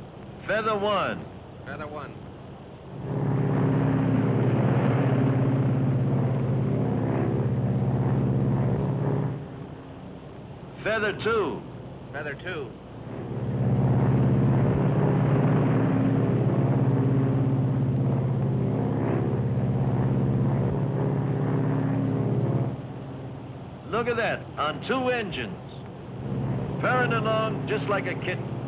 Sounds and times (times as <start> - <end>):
Engine: 0.0 - 28.6
Speech: 0.4 - 2.2, 10.8 - 12.8, 23.9 - 25.8, 26.8 - 28.4
Fixed-wing aircraft, airplane: 2.6 - 10.9, 12.8 - 24.5, 25.6 - 28.6.